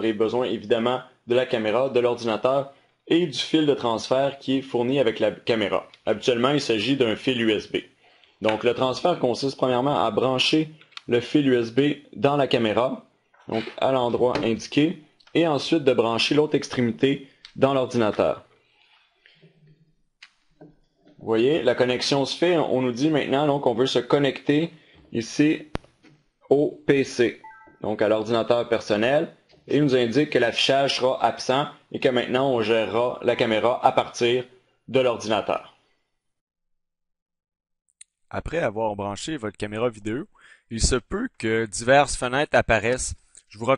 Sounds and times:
Speech: 0:00.0 - 0:18.5, 0:21.2 - 0:25.8, 0:26.5 - 0:35.8, 0:38.3 - 0:43.7.

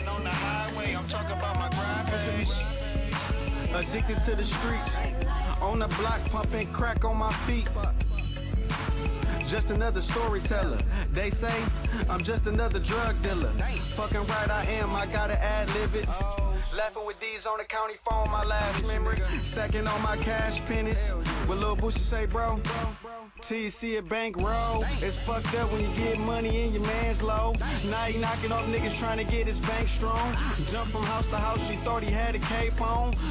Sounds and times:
Dance music: 0:00.0 - 0:33.3.

